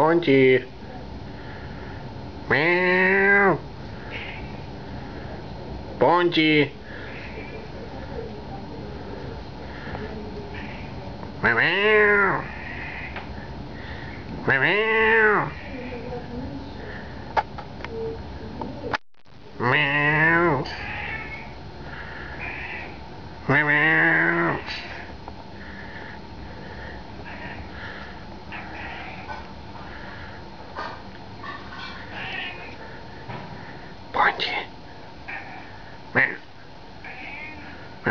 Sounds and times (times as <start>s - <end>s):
Meow: 19.7s - 21.5s, 32.1s - 32.7s, 37.0s - 37.7s.